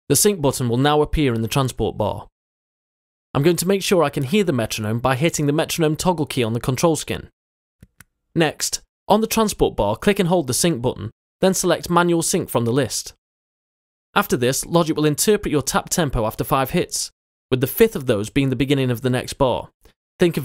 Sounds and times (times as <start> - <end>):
Speech: 0.1 - 2.3, 3.4 - 7.3, 8.4 - 13.2, 14.2 - 20.4.